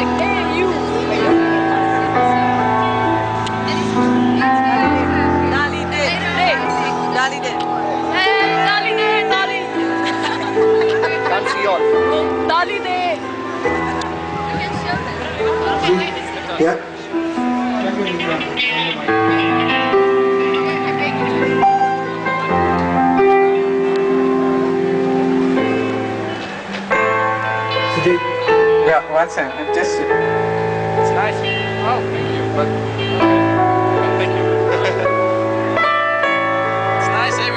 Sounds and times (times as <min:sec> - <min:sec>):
Music: 0:00.0 - 0:37.5.